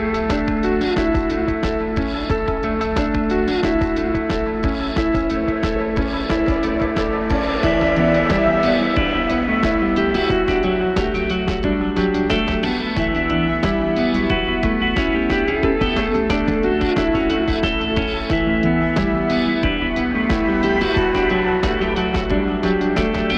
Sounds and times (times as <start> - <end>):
Music: 0.0 - 23.3.